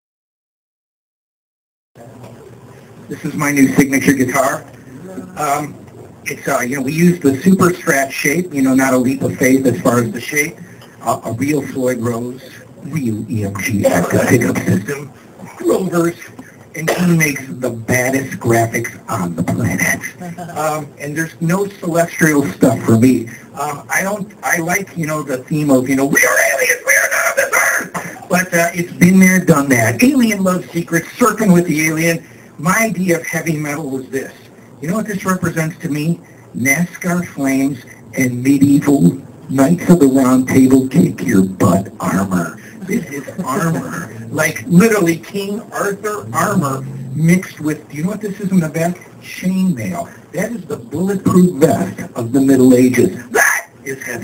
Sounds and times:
Speech: 0:03.1 - 0:54.2.

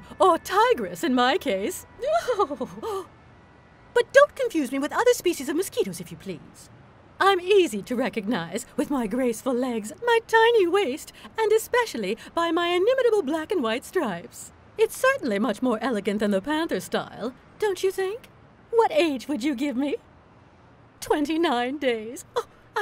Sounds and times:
Speech: 0:00.0 - 0:03.1, 0:04.0 - 0:20.0, 0:21.0 - 0:22.8.

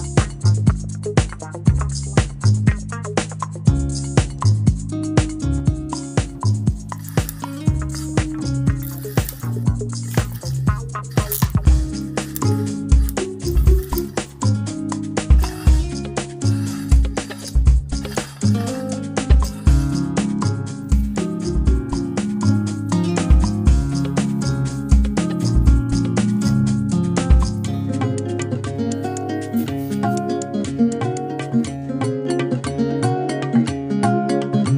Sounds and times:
Music: 0:00.0 - 0:34.7.

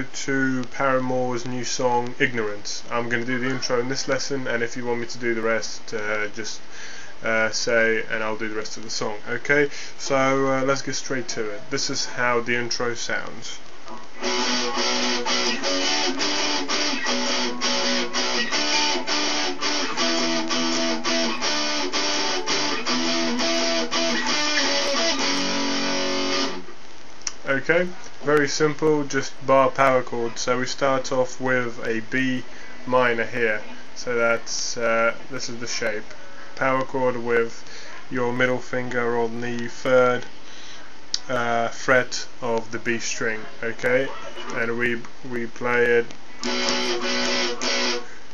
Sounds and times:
Speech: 0:00.0 - 0:06.6, 0:07.2 - 0:14.8, 0:27.3 - 0:40.3, 0:41.2 - 0:48.1
Electric guitar: 0:13.9 - 0:27.4, 0:46.4 - 0:48.3.

